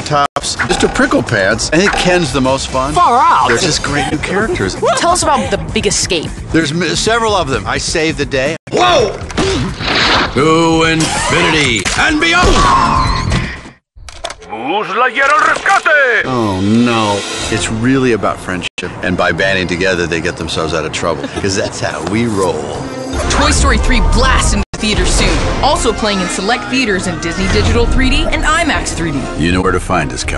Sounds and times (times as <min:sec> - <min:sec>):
Music: 0:00.4 - 0:11.3, 0:16.3 - 0:30.3
Speech: 0:14.5 - 0:22.8.